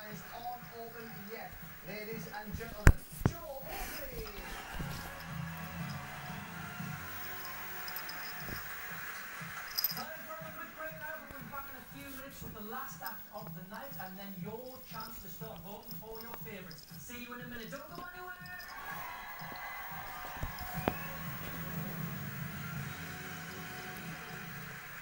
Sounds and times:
Speech: 0:00.0 - 0:04.9, 0:10.0 - 0:18.7
Music: 0:04.3 - 0:25.0.

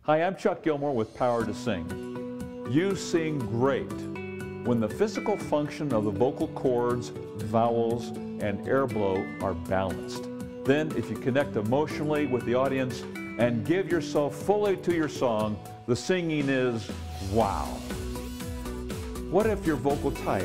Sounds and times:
Speech: 0:00.0 - 0:01.9, 0:02.7 - 0:03.9, 0:04.7 - 0:17.8, 0:19.3 - 0:20.4
Music: 0:00.4 - 0:20.4.

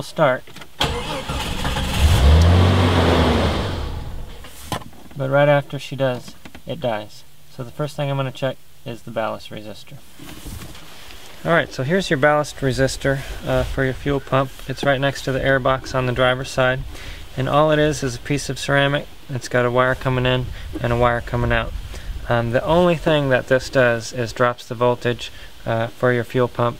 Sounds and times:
Speech: 0:00.0 - 0:00.5, 0:05.2 - 0:10.1, 0:11.4 - 0:26.7
Vehicle: 0:00.8 - 0:04.8.

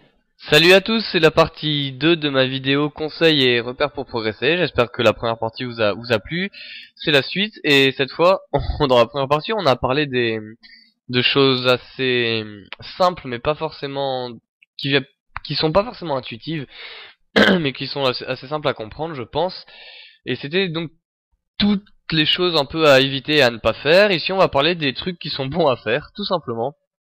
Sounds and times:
Speech: 0:00.4 - 0:16.8, 0:17.4 - 0:21.0, 0:21.6 - 0:26.9.

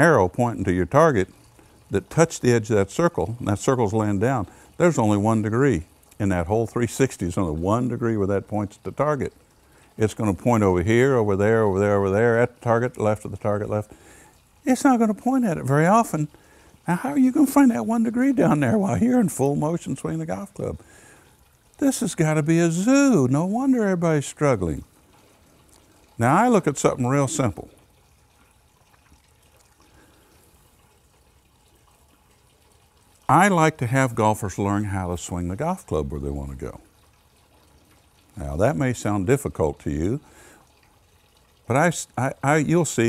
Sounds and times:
Sink (filling or washing): 0:00.0 - 0:43.0
Water: 0:00.0 - 0:43.0
Water tap, faucet: 0:00.0 - 0:43.0.

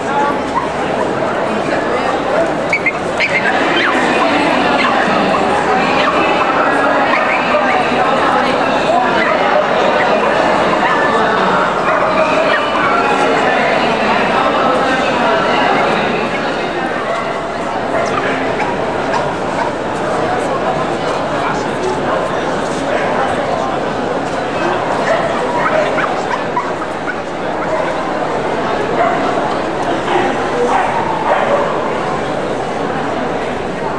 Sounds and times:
Speech: 0:00.0 - 0:33.9.

